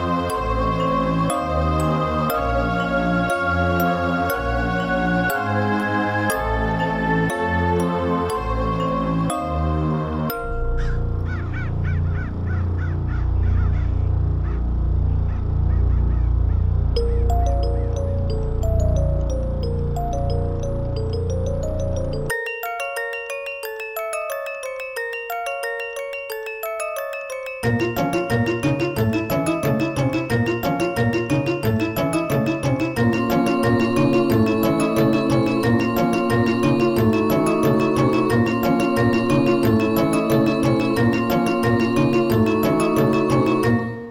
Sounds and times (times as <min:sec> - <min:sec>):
Music: 0:00.0 - 0:13.8, 0:17.0 - 0:44.1.